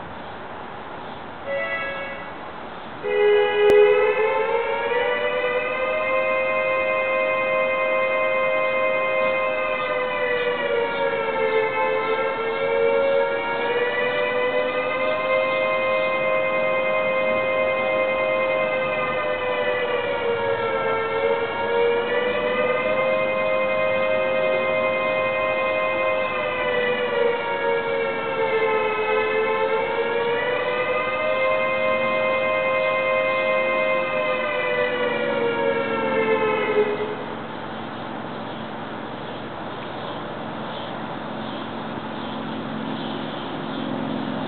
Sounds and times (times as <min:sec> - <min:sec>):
Civil defense siren: 0:01.5 - 0:02.4, 0:03.0 - 0:38.4.